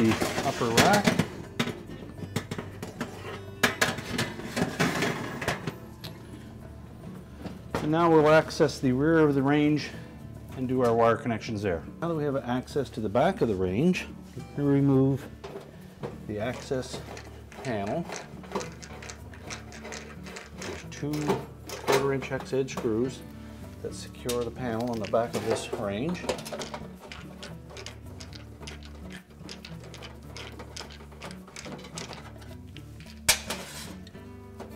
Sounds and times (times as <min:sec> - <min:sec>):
Speech: 0:00.0 - 0:01.2, 0:07.8 - 0:09.9, 0:10.6 - 0:15.2, 0:16.3 - 0:17.0, 0:20.9 - 0:23.2, 0:23.8 - 0:26.3
Music: 0:00.0 - 0:34.7.